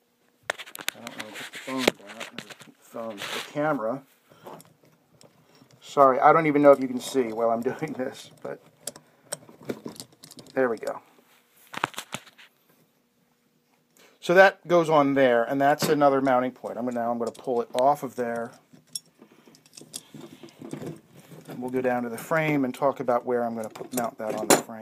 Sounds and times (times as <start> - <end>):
Inside, small room: 0.0 - 24.8
Speech: 1.0 - 4.1, 5.8 - 8.6, 10.5 - 11.1, 14.2 - 18.6, 21.5 - 24.8.